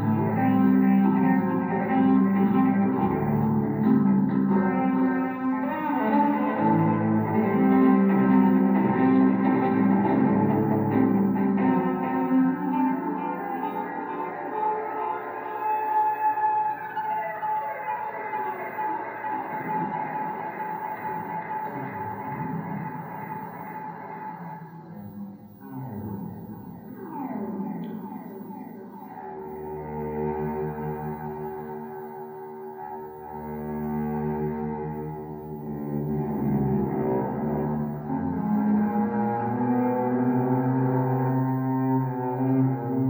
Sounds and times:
Cello: 0:00.0 - 0:43.0.

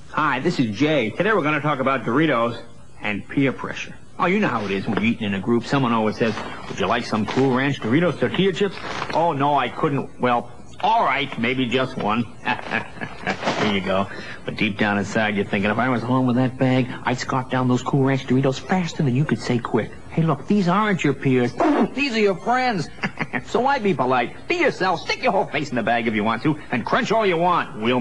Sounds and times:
Speech: 0:00.1 - 0:28.0.

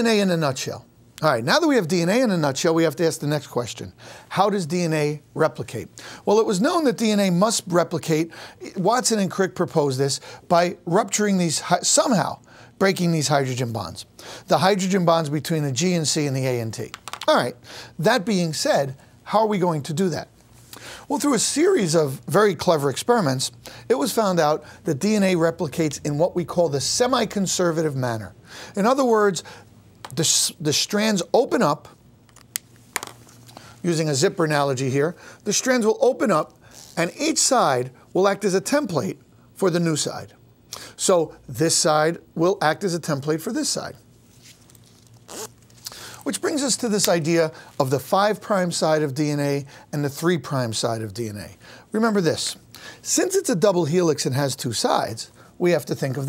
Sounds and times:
Speech: 0:00.0 - 0:20.3, 0:21.1 - 0:29.4, 0:30.1 - 0:32.0, 0:33.8 - 0:40.4, 0:41.0 - 0:44.0, 0:46.2 - 0:56.2
Inside, small room: 0:00.0 - 0:56.2.

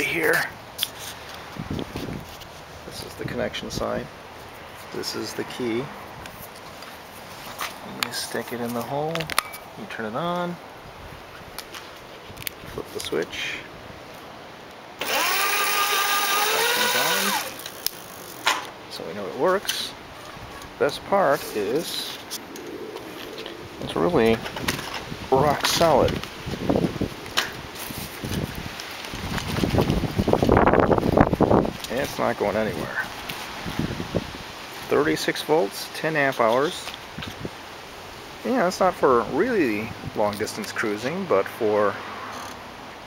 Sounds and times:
Speech: 0:00.0 - 0:00.6, 0:02.9 - 0:04.1, 0:04.9 - 0:06.0, 0:07.8 - 0:10.6, 0:12.7 - 0:13.7, 0:18.9 - 0:20.0, 0:20.8 - 0:22.2, 0:23.8 - 0:24.5, 0:25.3 - 0:26.2, 0:31.9 - 0:33.1, 0:34.9 - 0:37.0, 0:38.4 - 0:42.0
Bicycle: 0:15.0 - 0:18.6.

